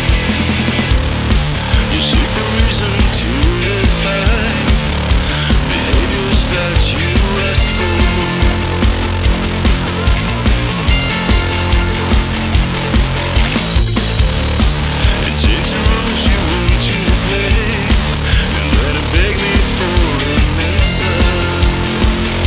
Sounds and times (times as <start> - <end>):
Funk: 0.0 - 22.4
Jazz: 0.0 - 22.4.